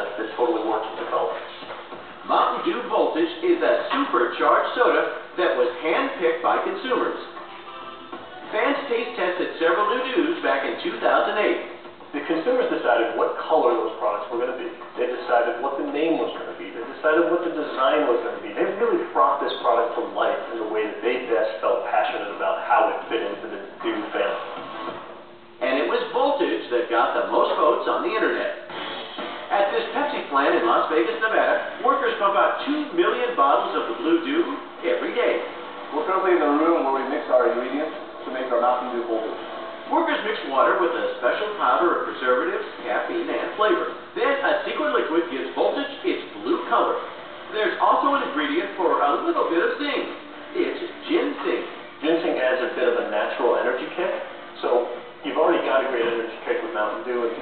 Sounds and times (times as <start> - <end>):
Speech: 0.0 - 7.4, 8.5 - 24.5, 25.6 - 28.7, 29.5 - 57.4.